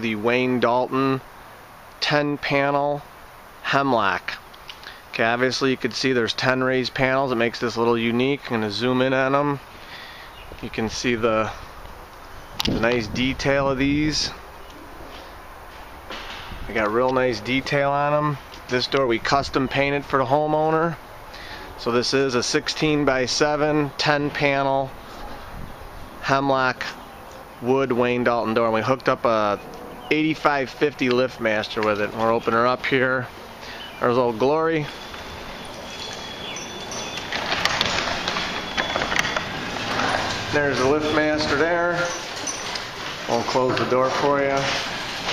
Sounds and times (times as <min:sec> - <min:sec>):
Speech: 0:00.0 - 0:01.2, 0:02.0 - 0:04.4, 0:05.1 - 0:09.6, 0:10.6 - 0:11.7, 0:12.7 - 0:14.4, 0:16.7 - 0:21.0, 0:21.8 - 0:25.0, 0:26.2 - 0:27.0, 0:27.6 - 0:33.3, 0:34.0 - 0:35.0, 0:40.5 - 0:42.3, 0:43.3 - 0:44.8.